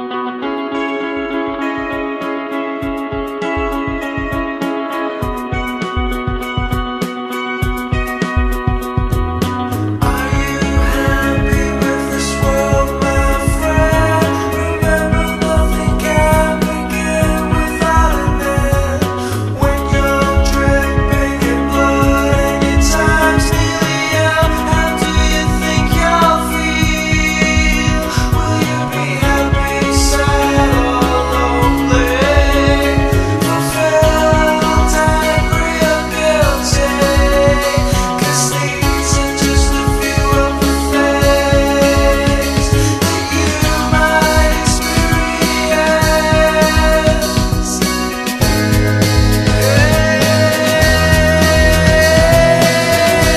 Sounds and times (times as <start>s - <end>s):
Music: 0.0s - 53.3s.